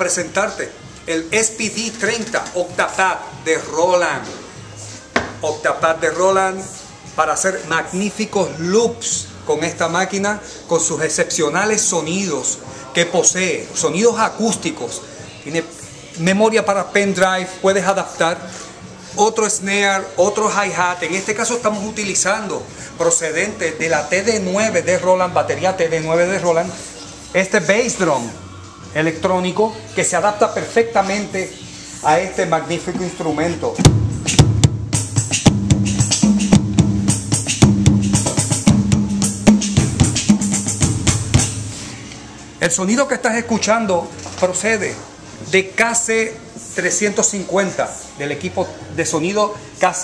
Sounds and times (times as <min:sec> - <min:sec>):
Speech: 0:00.0 - 0:04.3, 0:05.4 - 0:18.5, 0:19.2 - 0:28.4, 0:29.0 - 0:33.8, 0:42.6 - 0:50.0
Music: 0:00.0 - 0:50.0.